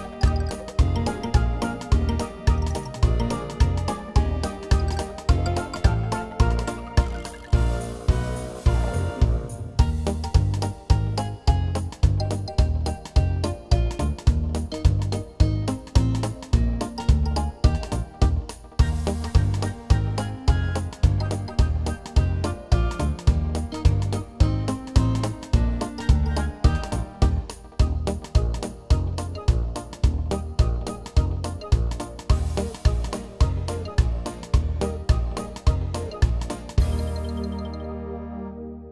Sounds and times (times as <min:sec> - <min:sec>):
Music: 0:00.0 - 0:38.9.